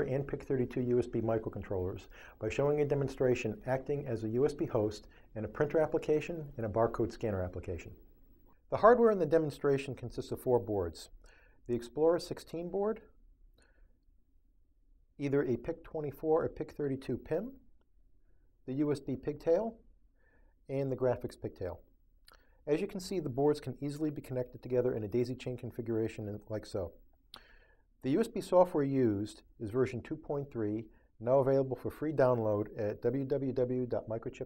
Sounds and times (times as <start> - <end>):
Speech: 0.0 - 8.0, 8.7 - 13.1, 15.2 - 17.6, 18.7 - 19.8, 20.7 - 21.9, 22.6 - 27.0, 28.0 - 34.4.